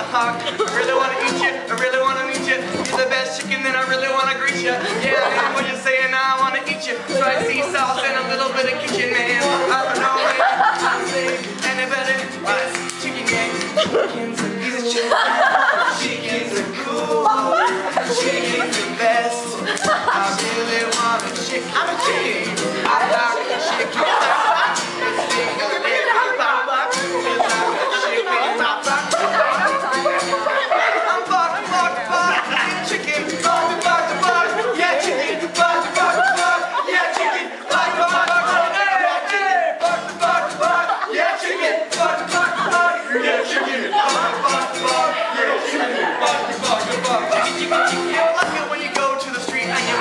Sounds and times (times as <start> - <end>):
Music: 0.0 - 50.0.